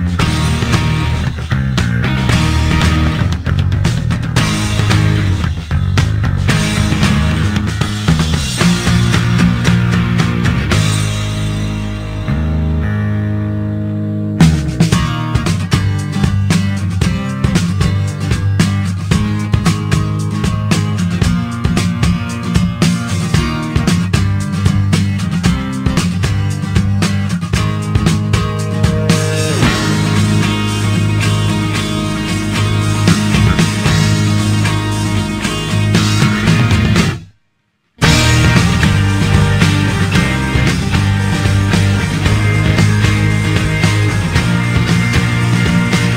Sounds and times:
Music: 0:00.0 - 0:46.1.

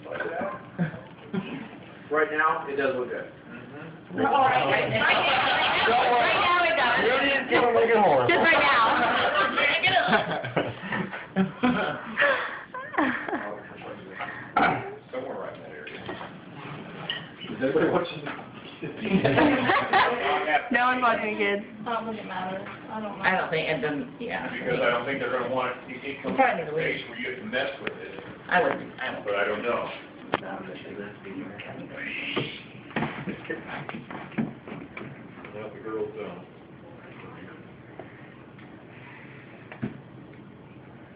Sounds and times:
Inside, small room: 0:00.0 - 0:41.1.

